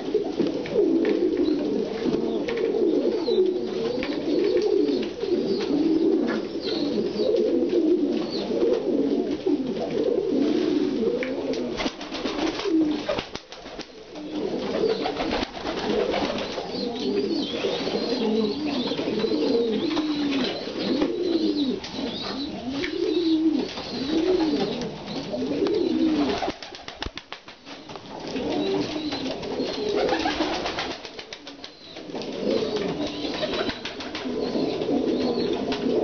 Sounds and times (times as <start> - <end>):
Coo: 0.0 - 27.0, 27.8 - 36.0.